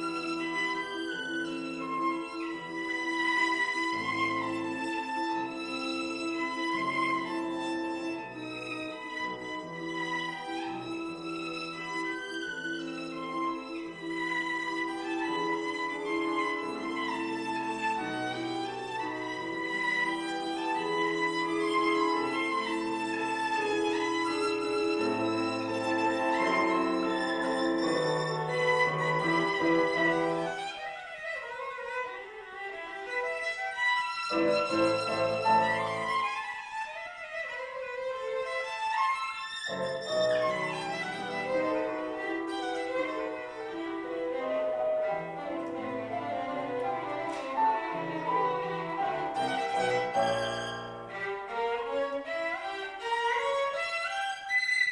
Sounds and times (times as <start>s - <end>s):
Violin, fiddle: 0.0s - 54.9s.